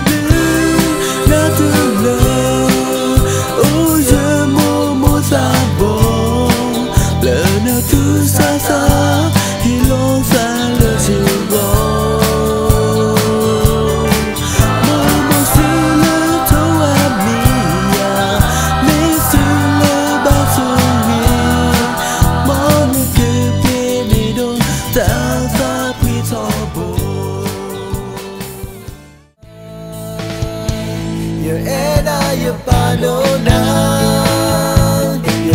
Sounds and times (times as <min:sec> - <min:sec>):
Independent music: 0:00.0 - 0:35.5
Musical instrument: 0:13.9 - 0:28.9.